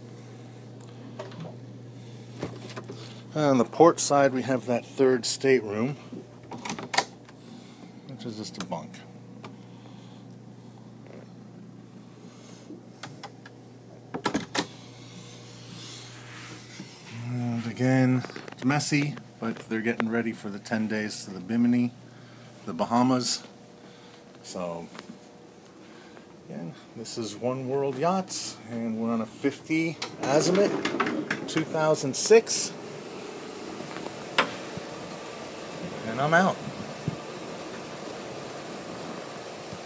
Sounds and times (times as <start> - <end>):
Speech: 3.4 - 6.0, 8.1 - 9.1, 17.1 - 22.0, 22.7 - 23.5, 24.4 - 25.0, 26.5 - 30.8, 31.5 - 32.8, 35.9 - 36.6
Sliding door: 30.0 - 31.7.